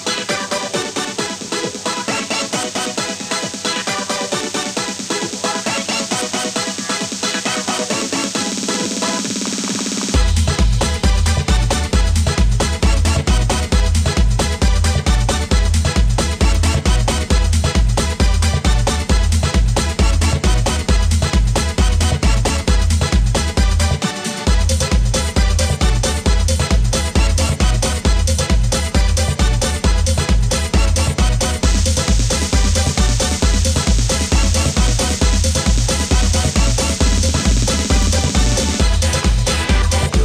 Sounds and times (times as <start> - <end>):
Techno: 0.0 - 40.2.